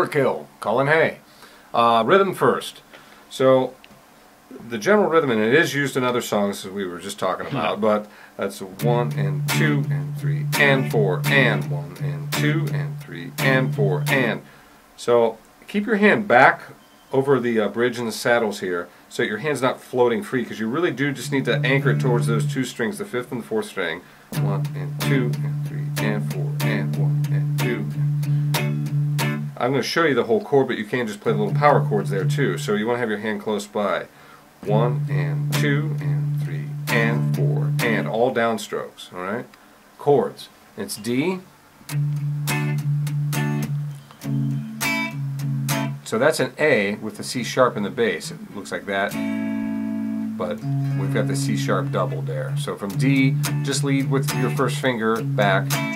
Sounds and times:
Speech: 0.0s - 3.8s, 4.5s - 28.0s, 29.6s - 41.5s, 46.0s - 49.2s, 50.4s - 55.8s
Electric guitar: 8.8s - 14.5s, 24.4s - 29.6s, 34.6s - 38.1s, 41.9s - 46.1s, 49.1s - 55.9s
Strum: 8.8s - 14.5s, 20.8s - 22.8s, 24.4s - 29.6s, 31.2s - 32.8s, 34.6s - 38.2s, 41.9s - 46.1s, 49.1s - 55.9s.

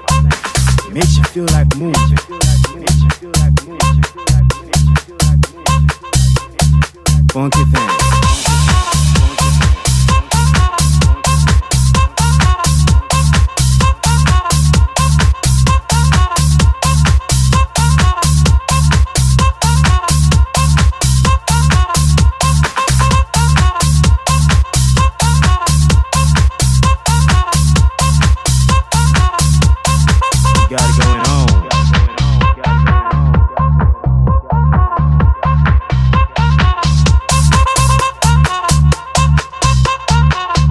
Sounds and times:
House music: 0.0s - 40.7s.

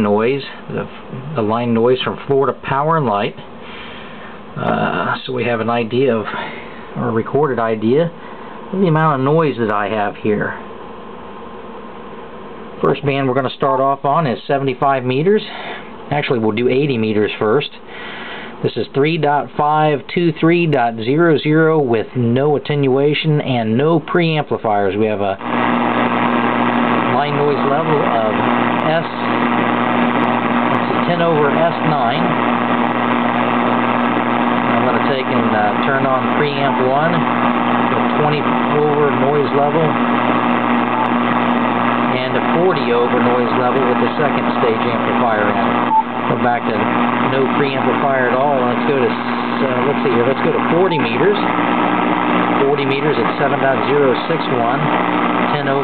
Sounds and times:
Speech: 0.0s - 3.5s, 4.6s - 10.6s, 12.8s - 17.9s, 18.6s - 25.5s, 27.0s - 32.4s, 33.4s - 40.0s, 42.0s - 51.6s, 52.5s - 55.8s.

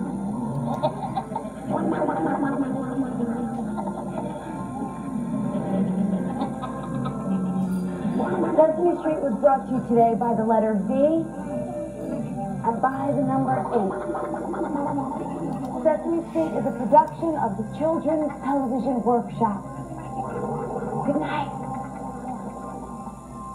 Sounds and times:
Music: 0.0s - 23.5s
Speech: 12.7s - 14.0s.

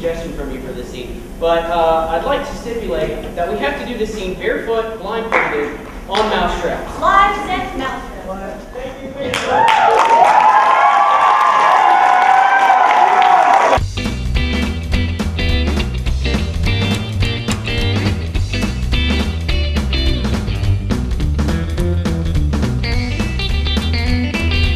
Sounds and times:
Speech: 0.0s - 9.5s.

